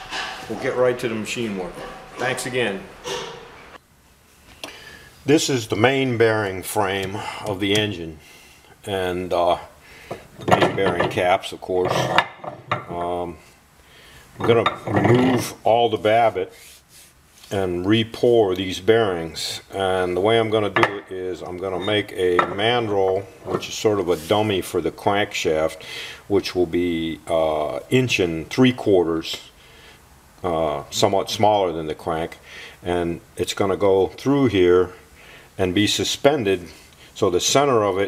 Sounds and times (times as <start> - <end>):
Speech: 0.4 - 2.9, 5.3 - 8.2, 8.8 - 9.8, 10.5 - 12.2, 12.8 - 13.5, 14.4 - 16.6, 17.5 - 29.5, 30.4 - 35.0, 35.6 - 38.0.